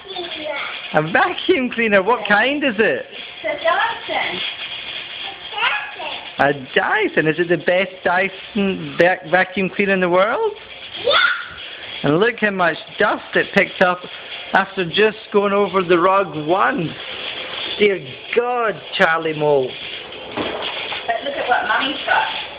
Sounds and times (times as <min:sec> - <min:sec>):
Child speech, kid speaking: 0:00.0 - 0:01.0, 0:03.4 - 0:04.5, 0:05.2 - 0:06.4, 0:11.0 - 0:11.6.